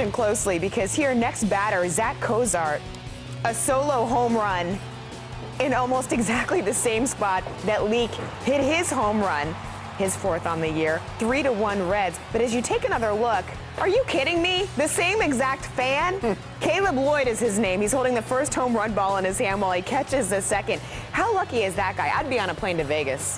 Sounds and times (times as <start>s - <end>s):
Speech: 0.0s - 2.8s, 5.6s - 23.3s
Music: 0.0s - 23.3s.